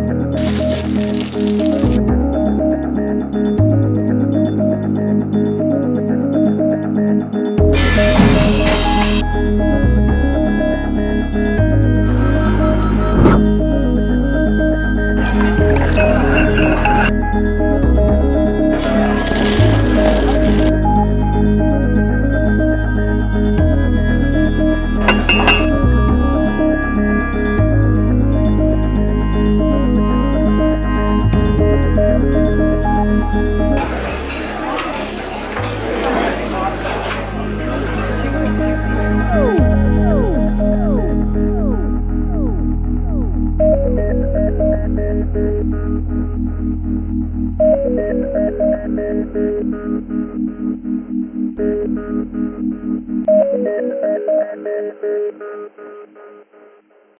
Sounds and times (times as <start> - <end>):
Music: 0.0 - 57.1.